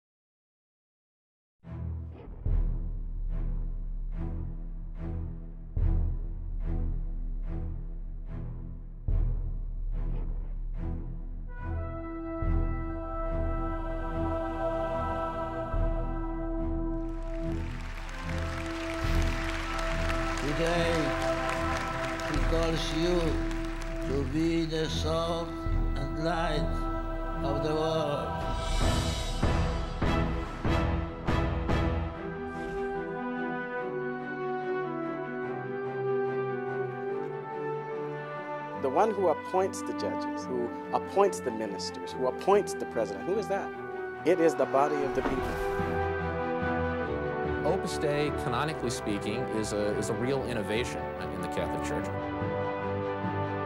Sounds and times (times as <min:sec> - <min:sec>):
Music: 0:01.6 - 0:53.6.